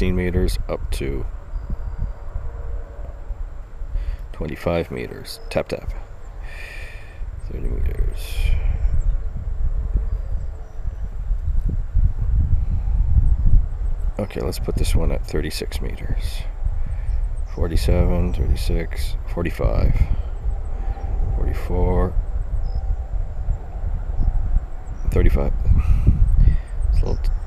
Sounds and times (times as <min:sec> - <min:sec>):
Speech: 0:00.0 - 0:01.3, 0:04.3 - 0:06.8, 0:07.5 - 0:08.7, 0:14.2 - 0:16.6, 0:17.5 - 0:20.2, 0:21.4 - 0:22.2, 0:25.0 - 0:25.7, 0:26.9 - 0:27.4.